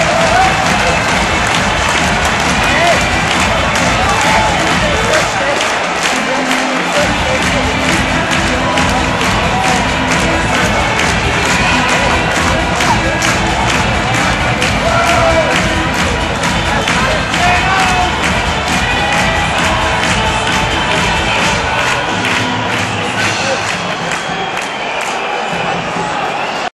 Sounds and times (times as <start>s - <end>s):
Music: 0.0s - 26.7s
Speech: 3.9s - 18.2s.